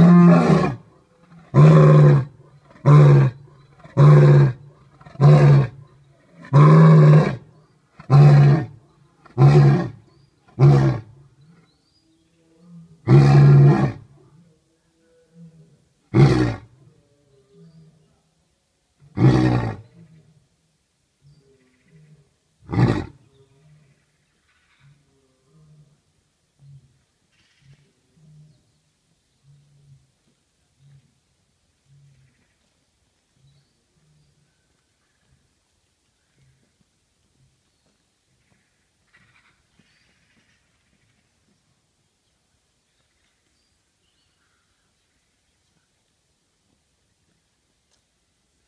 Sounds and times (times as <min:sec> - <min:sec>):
Roar: 0:00.0 - 0:11.7, 0:12.3 - 0:18.1, 0:19.0 - 0:20.4, 0:21.3 - 0:24.0.